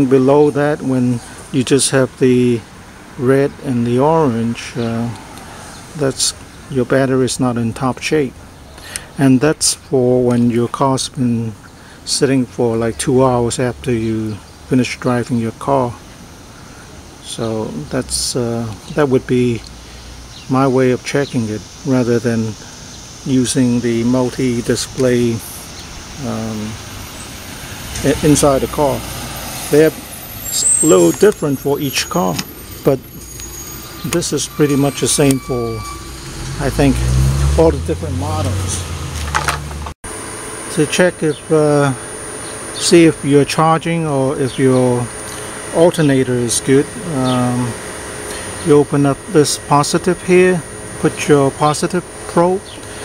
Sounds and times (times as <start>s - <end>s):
Speech: 0.0s - 2.6s, 3.2s - 5.2s, 6.0s - 8.4s, 9.1s - 16.0s, 17.2s - 19.7s, 20.5s - 22.6s, 23.2s - 25.5s, 26.2s - 26.8s, 28.0s - 29.0s, 29.7s - 33.0s, 34.0s - 36.0s, 36.6s - 38.8s, 40.7s - 42.0s, 42.8s - 45.1s, 45.7s - 47.8s, 48.6s - 52.7s
Car: 0.0s - 53.0s.